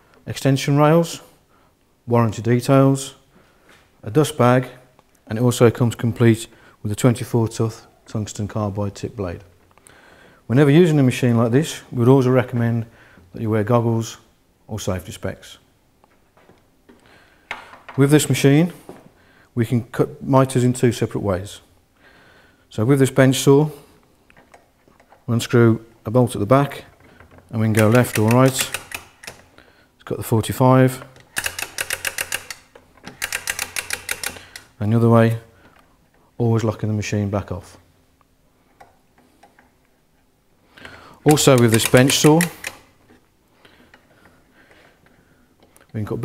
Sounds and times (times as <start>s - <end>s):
Speech: 0.3s - 1.3s, 2.1s - 3.2s, 4.0s - 9.5s, 10.5s - 15.7s, 18.0s - 18.8s, 19.6s - 21.7s, 22.7s - 23.8s, 25.3s - 28.8s, 30.0s - 31.1s, 34.8s - 35.5s, 36.4s - 37.9s, 41.2s - 42.6s, 45.9s - 46.2s.